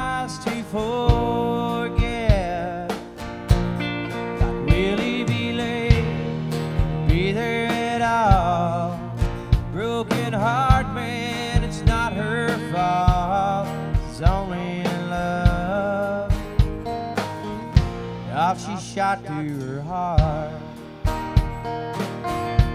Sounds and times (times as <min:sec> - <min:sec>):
Music: 0:00.0 - 0:22.7.